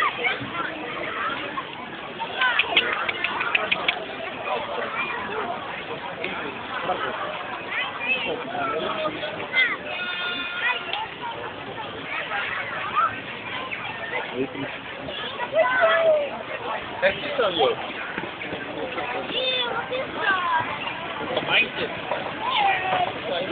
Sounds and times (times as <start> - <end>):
Speech: 0.0 - 23.5.